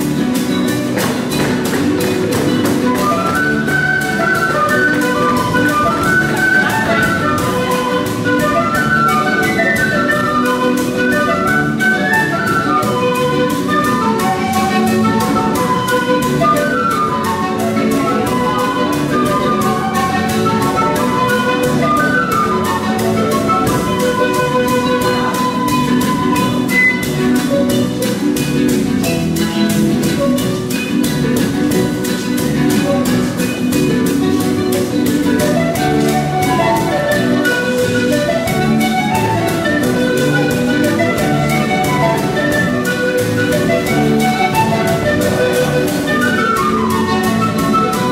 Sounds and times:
Music: 0.0s - 48.1s.

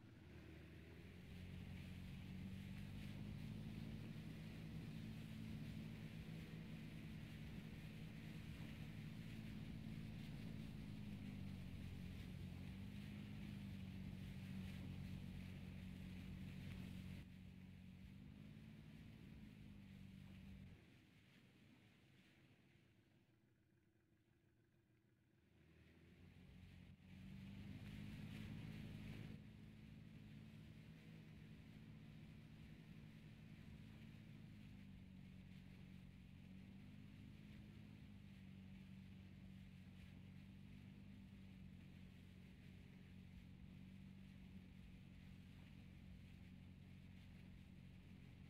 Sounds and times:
Motorboat, speedboat: 0.0s - 48.4s.

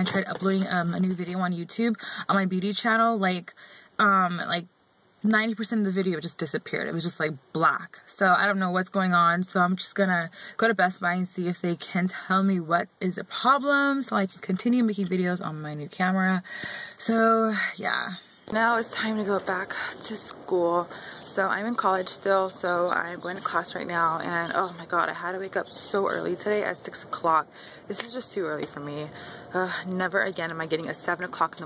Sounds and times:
Speech: 0.0s - 31.6s.

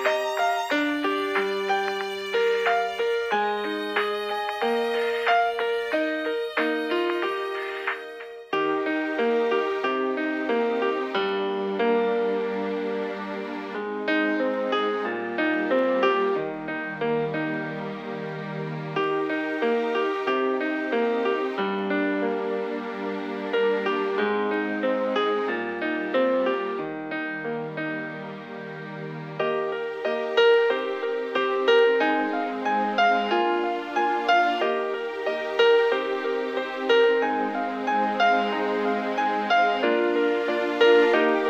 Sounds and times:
Music: 0.0s - 41.5s.

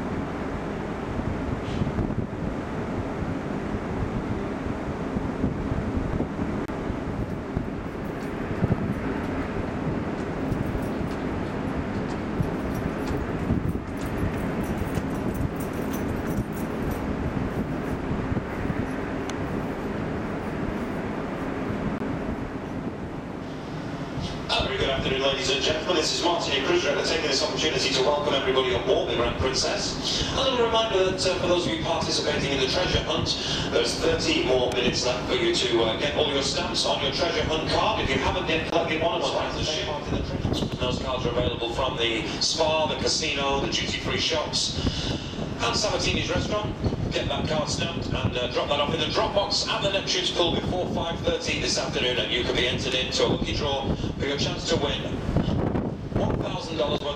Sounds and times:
Wind noise (microphone): 0.0s - 25.8s, 28.1s - 57.1s
Ship: 0.0s - 57.1s.

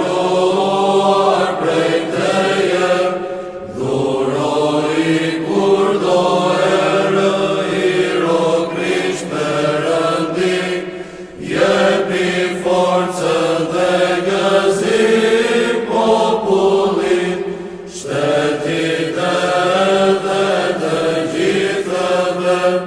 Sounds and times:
Mantra: 0.0s - 22.8s.

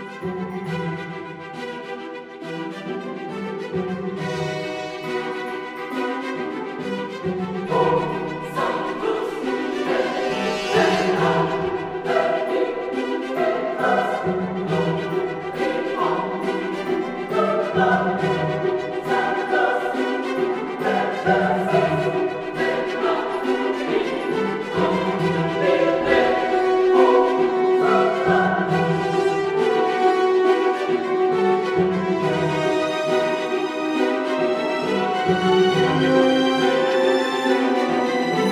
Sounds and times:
Music: 0.0s - 38.5s.

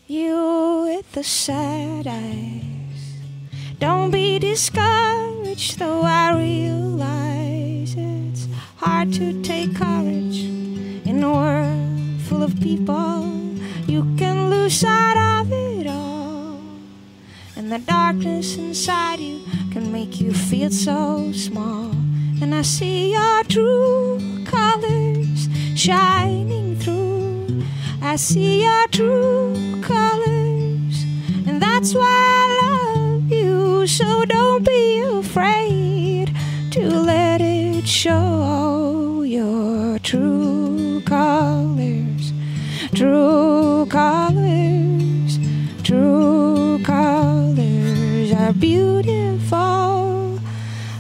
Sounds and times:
Music: 0.0s - 51.0s.

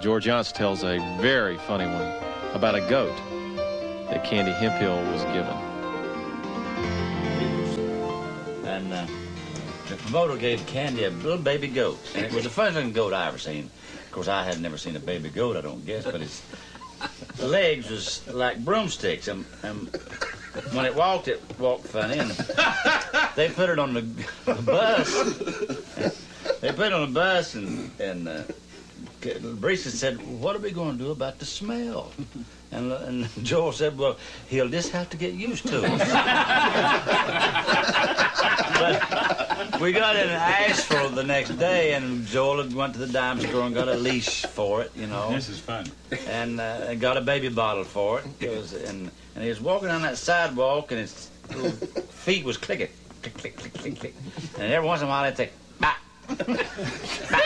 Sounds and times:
Speech: 4.1s - 5.6s, 9.9s - 16.4s, 17.4s - 20.0s, 26.0s - 28.6s, 29.2s - 36.0s, 39.8s - 51.3s, 52.2s - 55.6s.

